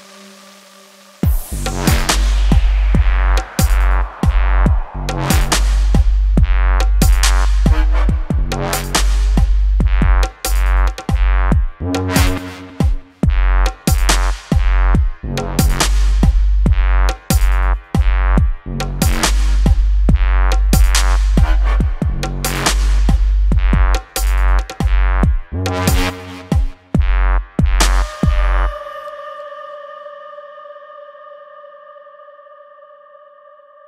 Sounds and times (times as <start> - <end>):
Electronica: 0.0 - 30.1.